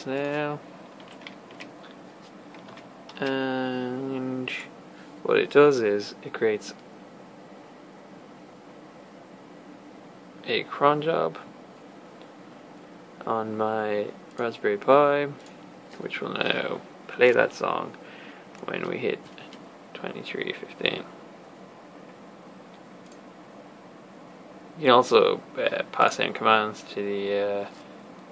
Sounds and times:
Speech: 0:00.0 - 0:00.6, 0:03.2 - 0:06.8, 0:10.4 - 0:11.5, 0:13.2 - 0:15.4, 0:16.0 - 0:18.0, 0:18.6 - 0:21.1, 0:24.8 - 0:27.8.

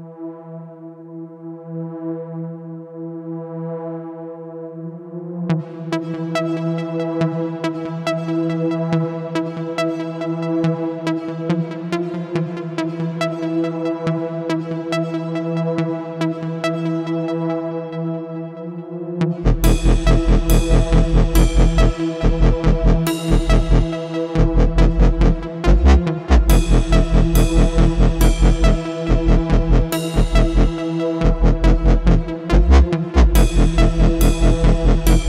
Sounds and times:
Music: 0:00.0 - 0:35.2.

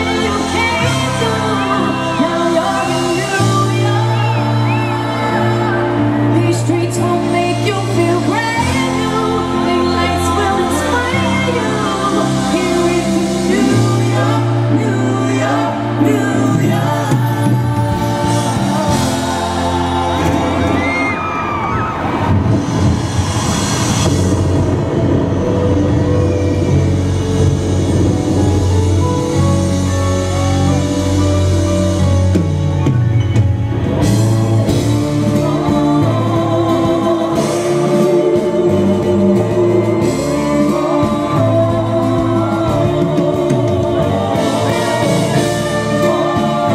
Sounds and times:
Music: 0:00.0 - 0:46.7.

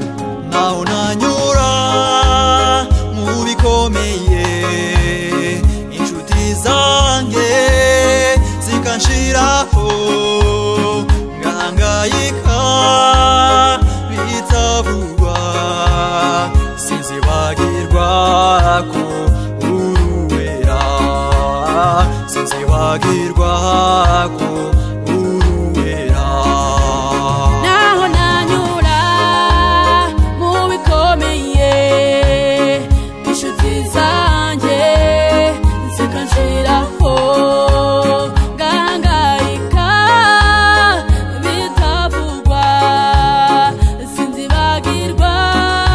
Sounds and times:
Gospel music: 0:00.0 - 0:45.9.

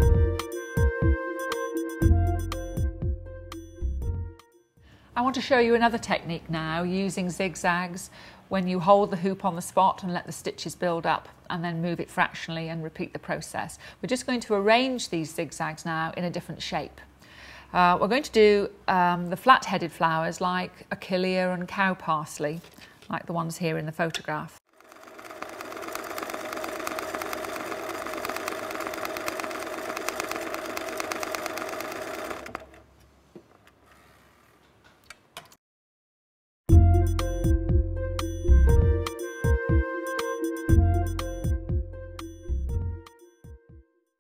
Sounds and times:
Speech: 0:05.2 - 0:17.0, 0:17.7 - 0:24.6.

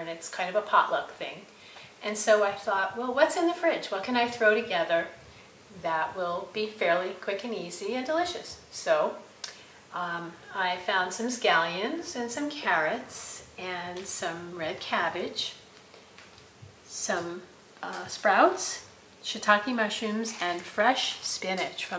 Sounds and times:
Speech: 0:00.0 - 0:05.2, 0:05.8 - 0:09.2, 0:09.9 - 0:15.6, 0:16.9 - 0:21.9.

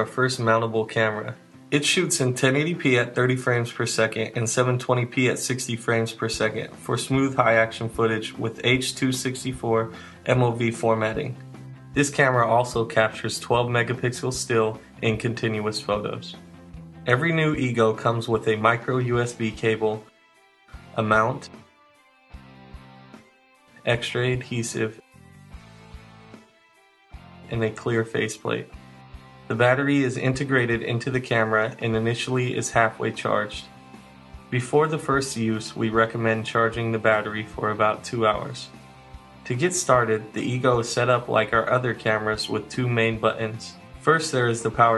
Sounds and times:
Speech: 0:00.0 - 0:11.4, 0:12.0 - 0:16.4, 0:17.1 - 0:20.1, 0:20.9 - 0:21.6, 0:23.8 - 0:25.0, 0:27.5 - 0:28.8, 0:29.5 - 0:33.7, 0:34.6 - 0:38.8, 0:39.5 - 0:44.9
Music: 0:00.0 - 0:44.9.

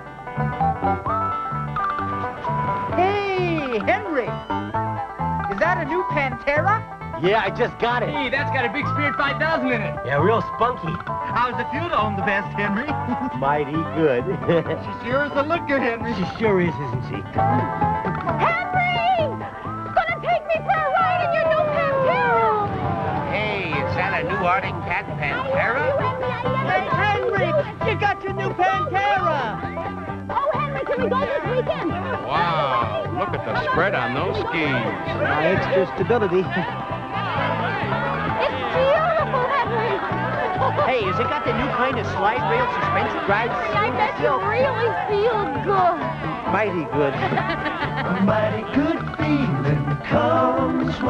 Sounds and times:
Music: 0:00.0 - 0:51.0.

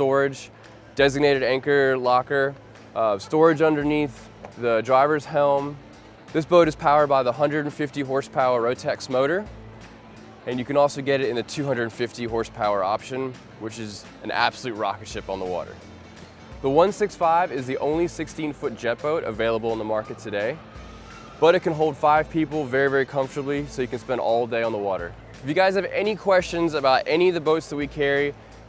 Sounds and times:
Speech: 0:00.0 - 0:05.8, 0:06.4 - 0:09.5, 0:10.5 - 0:15.8, 0:16.6 - 0:20.6, 0:21.4 - 0:28.3
Music: 0:00.0 - 0:28.6.

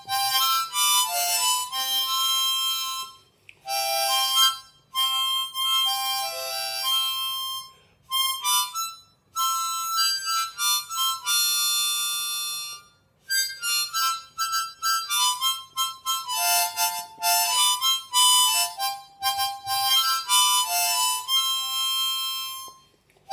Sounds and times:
Harmonica: 0:00.0 - 0:23.3
Wind instrument, woodwind instrument: 0:00.0 - 0:23.3.

